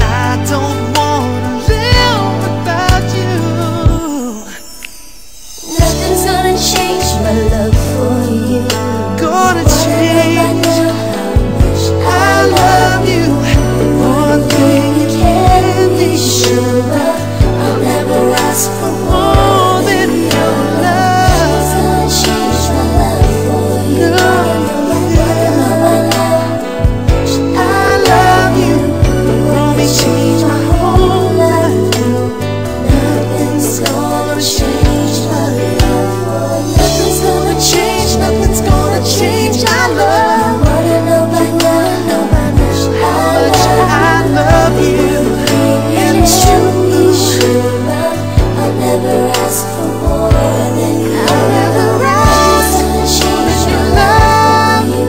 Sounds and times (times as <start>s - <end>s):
Music: 0.0s - 55.0s.